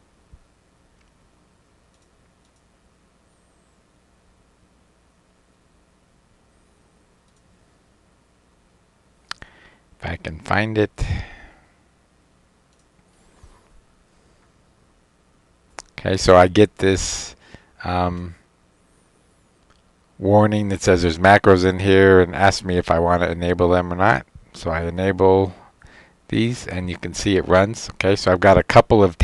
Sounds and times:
Speech: 10.0 - 11.3, 15.9 - 18.4, 20.2 - 25.6, 26.3 - 29.2.

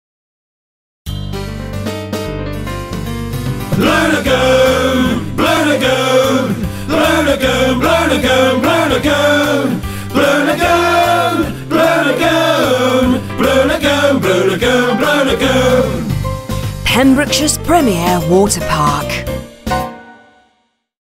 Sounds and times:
Music: 1.1 - 21.0
Speech: 16.9 - 19.3.

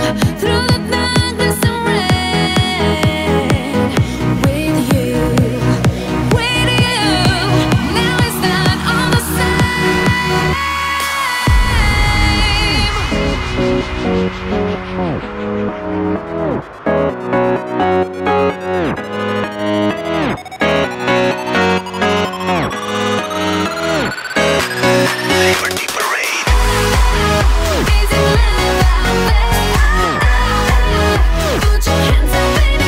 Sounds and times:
Music: 0.0 - 32.8.

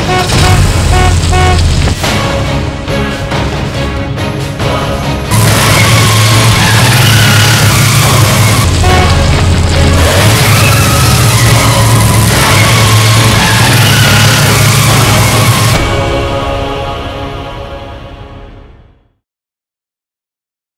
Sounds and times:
Music: 0.0 - 19.2.

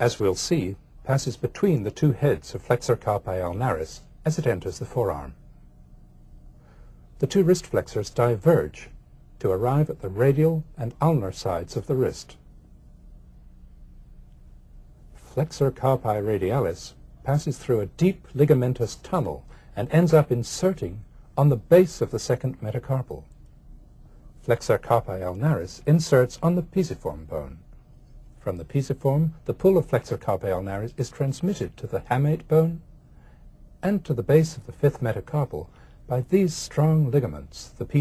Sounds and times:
Speech: 0.0 - 5.4, 7.2 - 12.4, 15.3 - 23.3, 24.4 - 27.6, 28.4 - 32.9, 33.8 - 38.0.

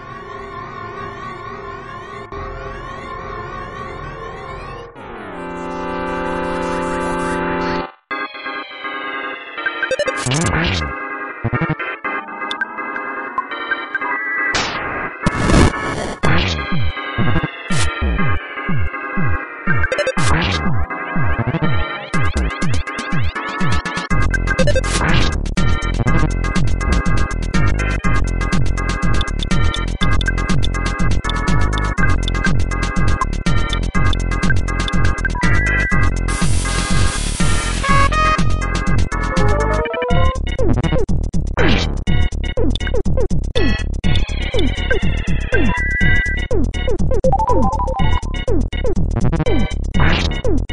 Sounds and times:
Music: 0.0 - 50.7.

